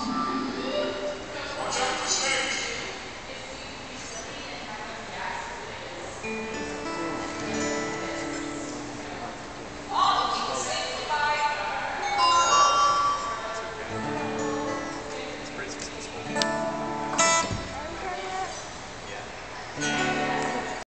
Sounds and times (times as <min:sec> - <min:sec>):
Acoustic guitar: 0:00.0 - 0:02.9, 0:06.2 - 0:10.6, 0:12.0 - 0:20.8
Speech: 0:00.6 - 0:06.2, 0:15.0 - 0:16.4.